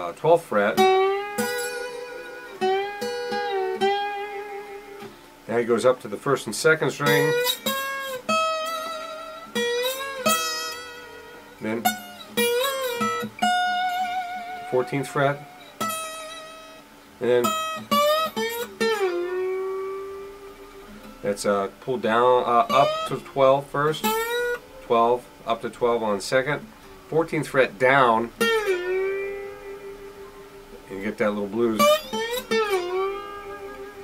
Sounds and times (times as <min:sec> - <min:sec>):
Speech: 0:00.0 - 0:00.8, 0:05.5 - 0:07.4, 0:11.6 - 0:12.0, 0:14.7 - 0:15.4, 0:17.2 - 0:17.6, 0:21.2 - 0:24.2, 0:24.8 - 0:28.4, 0:30.9 - 0:32.0
Acoustic guitar: 0:00.0 - 0:34.0.